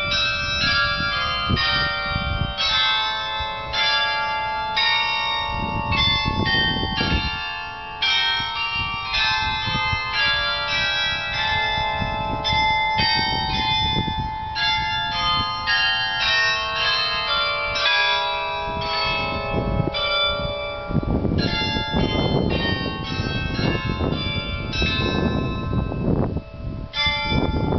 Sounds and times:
Change ringing (campanology): 0.0 - 27.7.

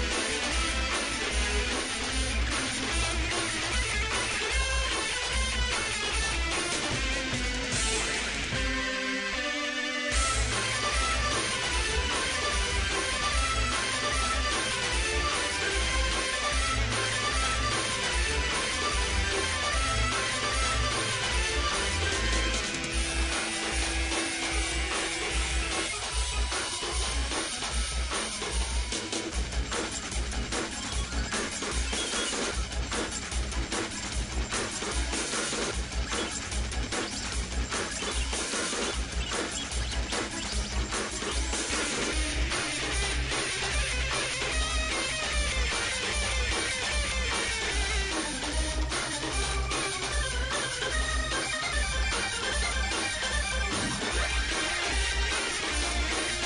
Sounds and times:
Music: 0.0 - 56.4.

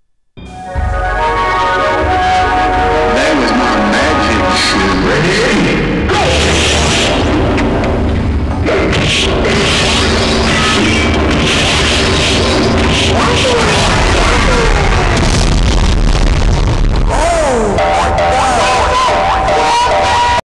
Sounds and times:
Speech: 3.1 - 6.8, 13.2 - 15.2, 17.1 - 19.1.

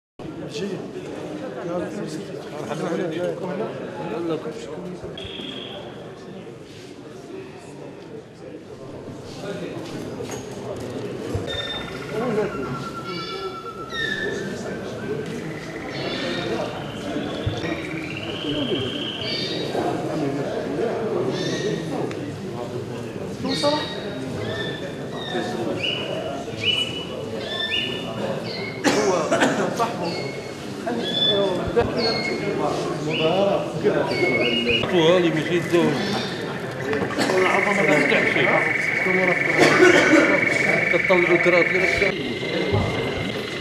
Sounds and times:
Speech: 0.2 - 43.6.

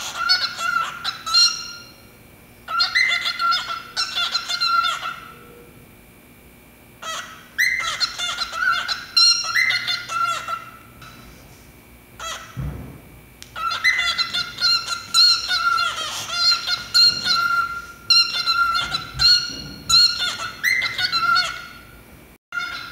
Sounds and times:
Bird: 0.0 - 2.0, 2.7 - 5.8, 7.0 - 11.3, 13.6 - 21.9, 22.6 - 22.9
Inside, small room: 0.0 - 22.9.

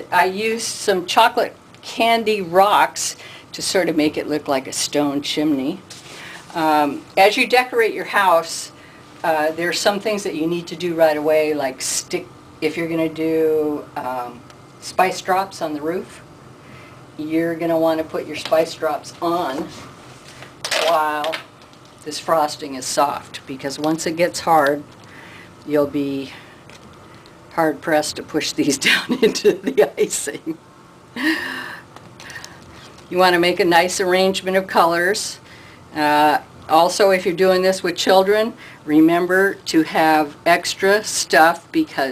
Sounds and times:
Speech: 0.0 - 5.8, 6.5 - 16.2, 17.2 - 19.8, 20.8 - 21.4, 22.0 - 24.9, 25.6 - 26.4, 27.5 - 30.6, 33.1 - 35.4, 36.0 - 42.1.

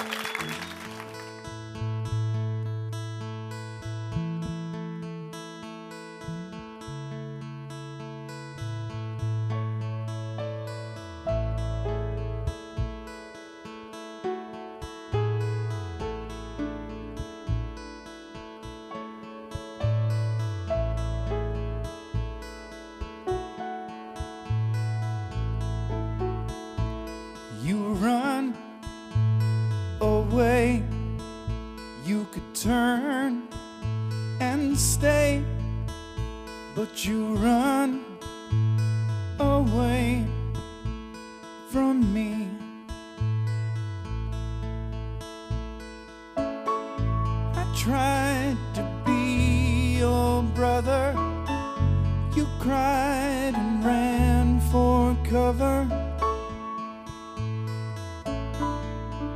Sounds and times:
Music: 0.0 - 59.3.

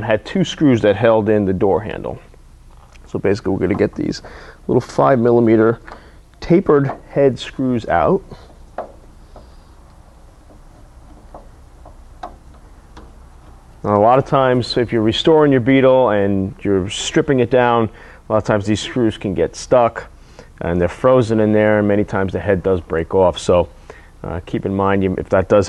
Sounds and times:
Speech: 0.0 - 2.3, 3.0 - 5.8, 6.4 - 8.4, 13.9 - 25.6.

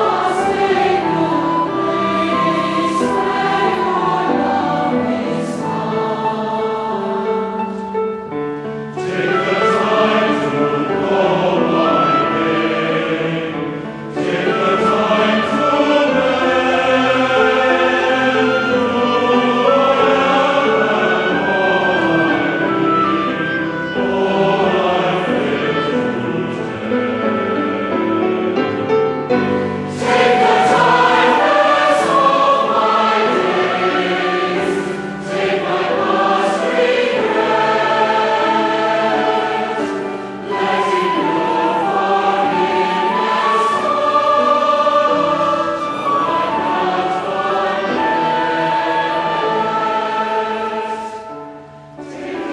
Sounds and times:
Music: 0.0 - 52.5.

